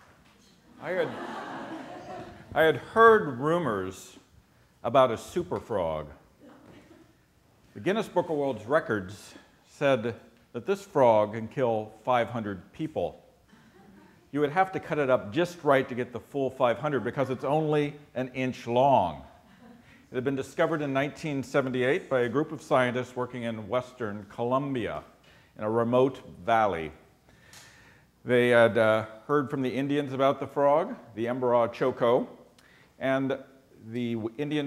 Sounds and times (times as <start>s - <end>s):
Speech: 0.8s - 1.3s, 2.6s - 4.2s, 4.8s - 6.2s, 7.8s - 13.2s, 14.3s - 19.3s, 20.1s - 27.0s, 28.3s - 32.4s, 33.0s - 34.6s.